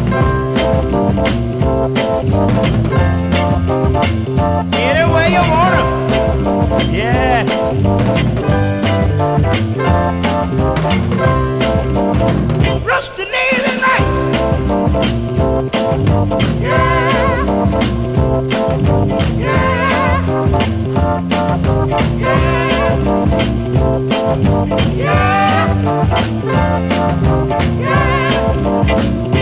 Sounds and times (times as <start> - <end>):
Music: 0.0 - 29.4.